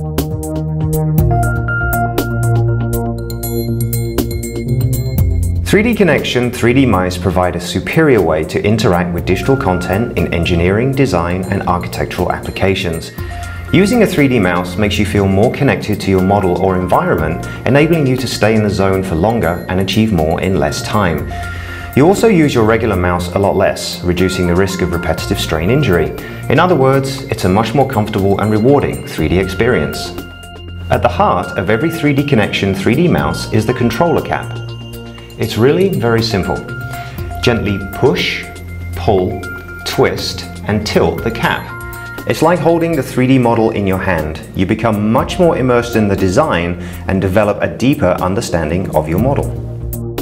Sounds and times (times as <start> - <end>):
Music: 0.0 - 50.2
Speech: 5.7 - 21.3, 22.0 - 30.2, 30.9 - 34.6, 35.4 - 36.7, 37.4 - 49.6.